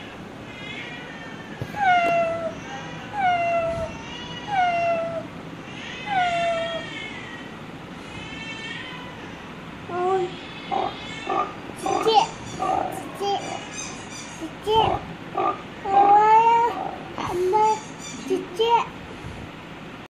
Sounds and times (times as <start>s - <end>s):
Speech: 14.4s - 15.0s, 17.2s - 19.0s.